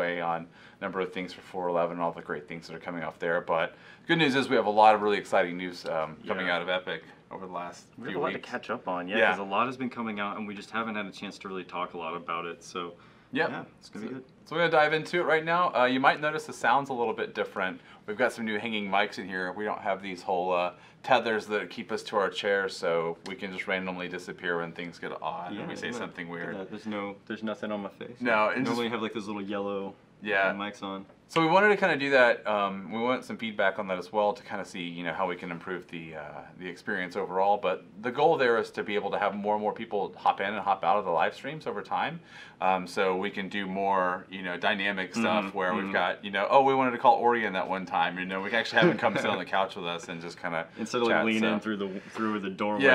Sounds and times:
Speech: 0.0s - 52.9s.

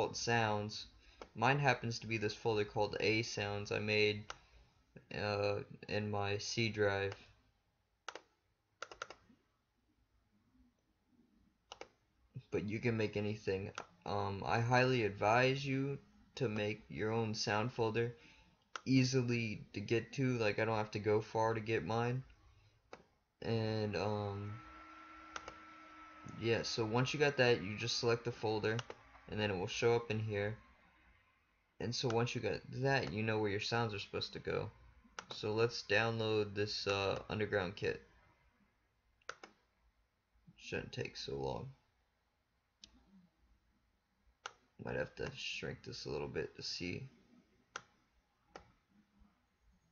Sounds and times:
Speech: 0.0s - 4.3s, 5.0s - 7.2s, 12.4s - 18.2s, 18.9s - 22.3s, 23.4s - 24.6s, 26.3s - 30.6s, 31.8s - 38.0s, 40.6s - 41.8s, 44.8s - 47.2s.

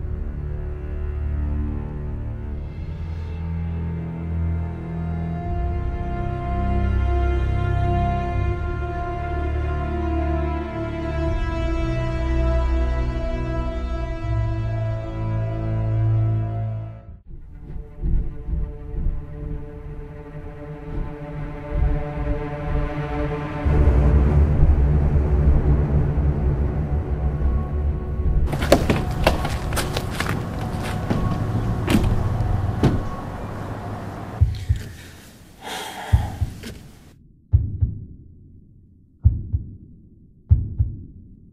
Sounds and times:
Music: 0.0s - 35.3s, 37.1s - 41.5s.

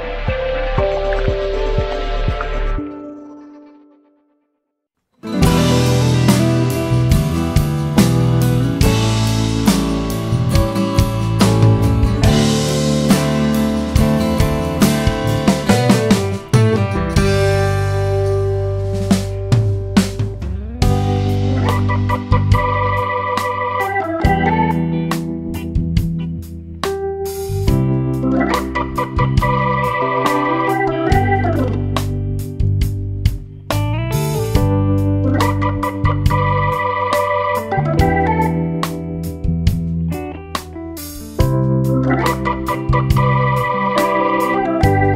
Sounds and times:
Music: 0.0s - 45.1s.

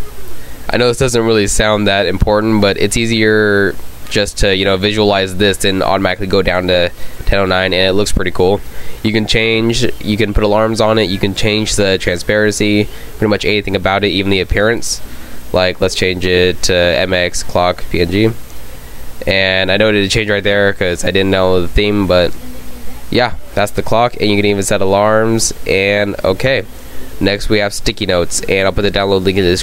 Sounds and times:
Speech: 0.0s - 18.4s, 19.2s - 29.6s.

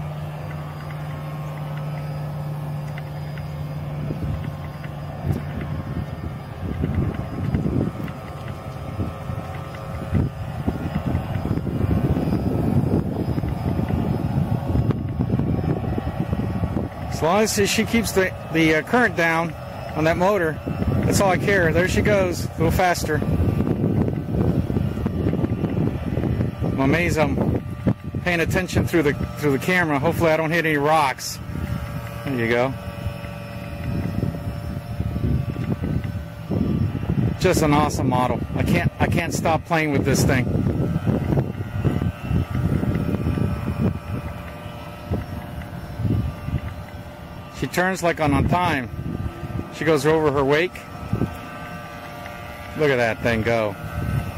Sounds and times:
Motorboat, speedboat: 0.0s - 54.3s.

